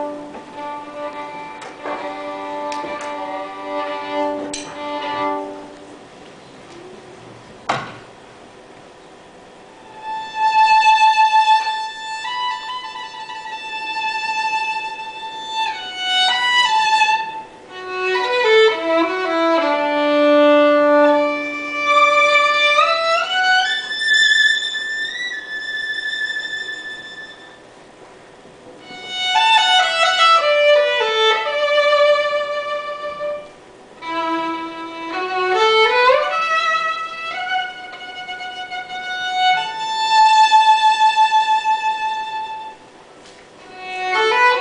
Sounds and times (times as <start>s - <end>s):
Violin, fiddle: 0.0s - 6.0s, 9.8s - 27.7s, 28.8s - 42.9s, 43.6s - 44.6s.